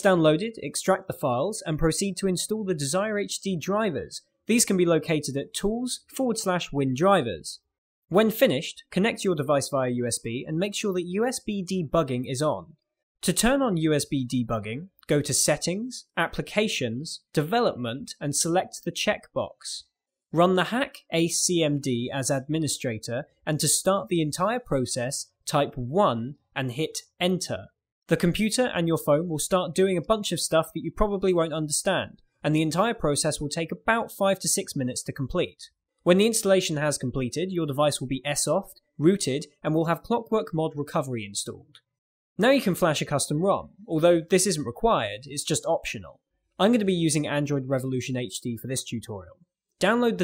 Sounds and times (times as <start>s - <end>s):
Narration, monologue: 0.0s - 50.2s.